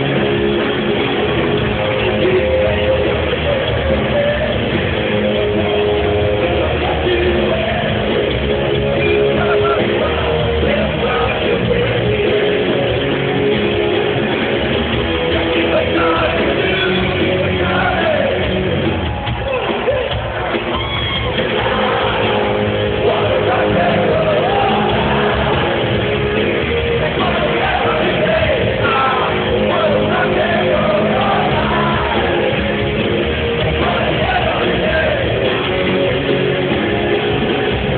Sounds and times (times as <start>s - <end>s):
Rock and roll: 0.0s - 37.9s.